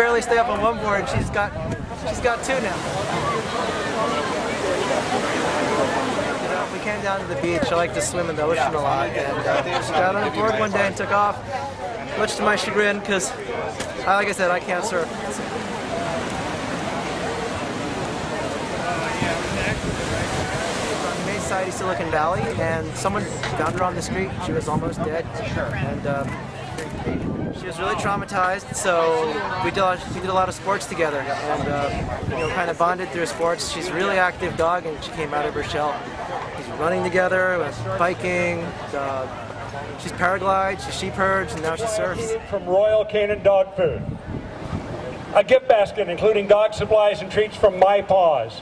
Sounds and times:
Waves, surf: 0:00.0 - 0:48.6
Wind noise (microphone): 0:00.6 - 0:02.2, 0:19.1 - 0:21.3, 0:22.3 - 0:28.6, 0:31.4 - 0:32.6, 0:43.2 - 0:45.3.

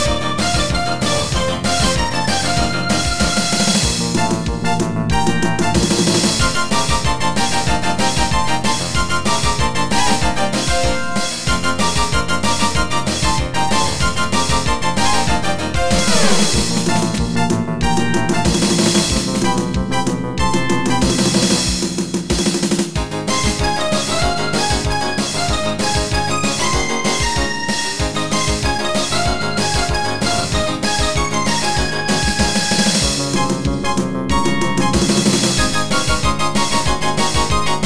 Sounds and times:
Disco: 0:00.0 - 0:37.8
Rhythm and blues: 0:00.0 - 0:37.8.

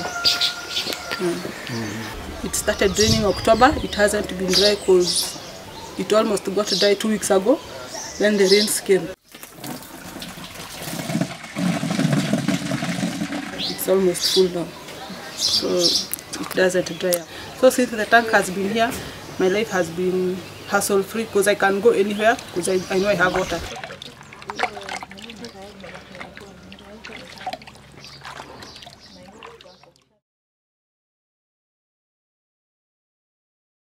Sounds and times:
Water: 0:00.0 - 0:19.5, 0:20.1 - 0:30.2
Outside, rural or natural: 0:00.0 - 0:30.2
Speech: 0:01.2 - 0:05.4, 0:13.6 - 0:27.6, 0:29.1 - 0:30.2.

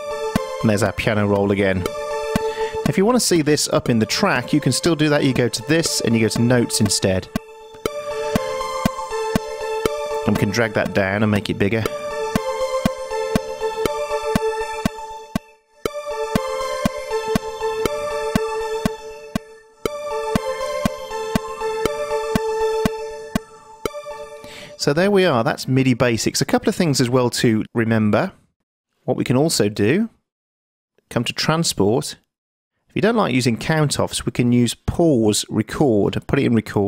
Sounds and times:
Synthesizer: 0:00.0 - 0:24.9
Speech: 0:00.6 - 0:01.9, 0:02.8 - 0:07.3, 0:10.3 - 0:11.9, 0:24.8 - 0:28.4, 0:29.1 - 0:30.2, 0:31.1 - 0:32.2, 0:33.0 - 0:36.8.

